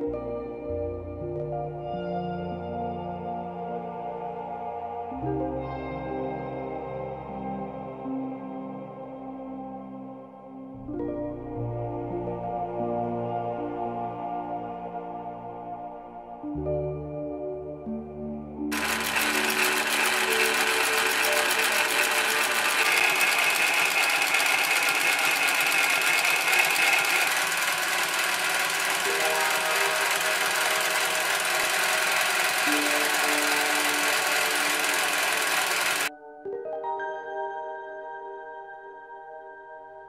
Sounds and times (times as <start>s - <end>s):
Music: 0.0s - 40.0s
Sewing machine: 18.7s - 36.1s.